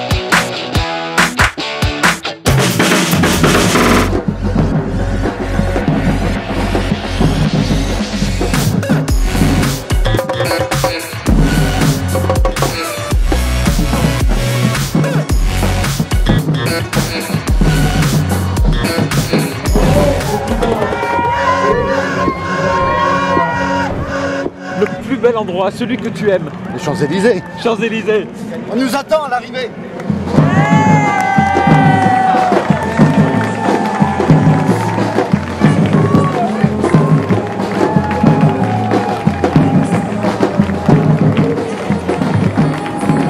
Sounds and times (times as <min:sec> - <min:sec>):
Music: 0:00.0 - 0:27.2, 0:30.0 - 0:43.3
Outside, urban or manmade: 0:00.0 - 0:43.3.